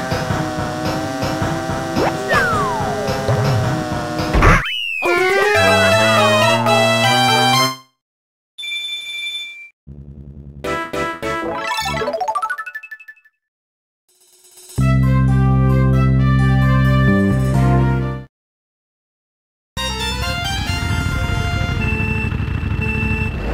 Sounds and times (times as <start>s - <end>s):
Music: 2.3s - 4.4s, 5.1s - 8.0s, 10.7s - 12.1s, 14.2s - 18.3s, 19.8s - 23.3s.